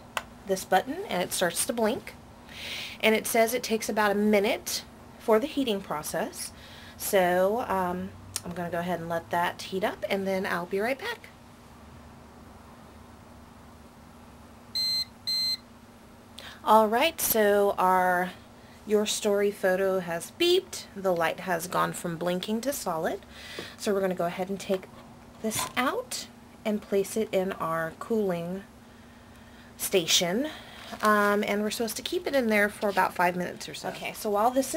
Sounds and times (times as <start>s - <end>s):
Inside, small room: 0.0s - 34.7s
Speech: 0.5s - 2.2s, 3.0s - 11.3s, 16.6s - 23.2s, 23.8s - 28.7s, 29.8s - 34.7s.